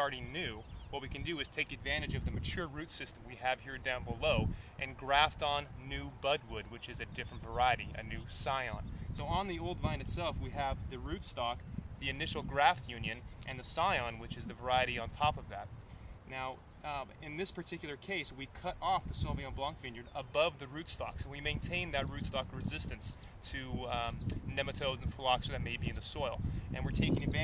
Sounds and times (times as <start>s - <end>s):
Speech: 0.0s - 15.7s, 16.3s - 27.4s.